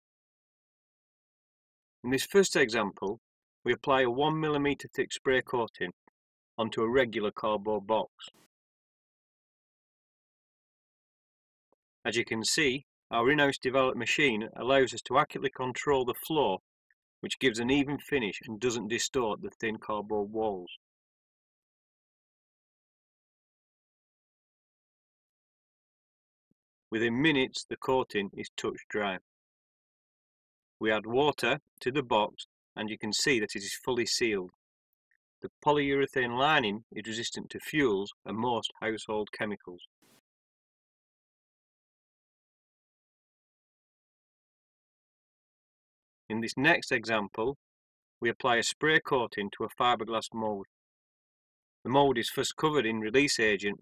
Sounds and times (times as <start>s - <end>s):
Speech: 2.1s - 6.0s, 6.6s - 8.5s, 12.1s - 16.6s, 17.2s - 20.8s, 26.9s - 29.3s, 30.8s - 34.6s, 35.4s - 39.9s, 46.3s - 47.6s, 48.2s - 50.7s, 51.9s - 53.8s.